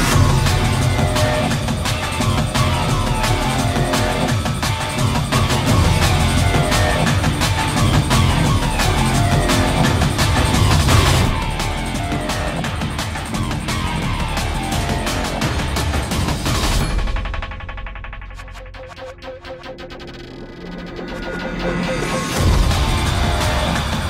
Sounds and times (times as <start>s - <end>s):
Music: 0.0s - 24.1s.